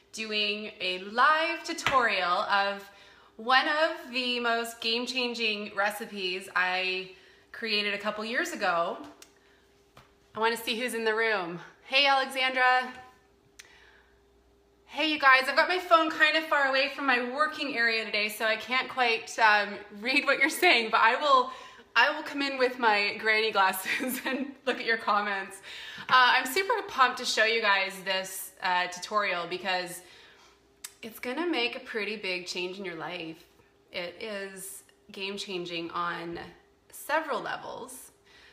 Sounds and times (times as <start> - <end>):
Speech: 0.2 - 9.2, 10.4 - 13.0, 14.9 - 30.1, 30.9 - 38.2.